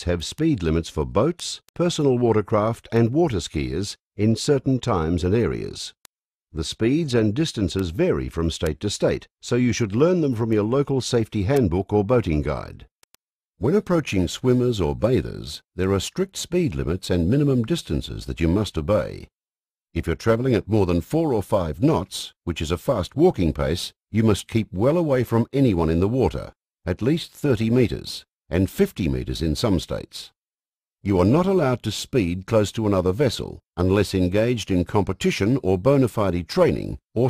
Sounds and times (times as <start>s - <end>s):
Speech: 0.0s - 6.0s, 6.6s - 12.9s, 13.6s - 19.3s, 20.0s - 30.4s, 31.0s - 37.3s.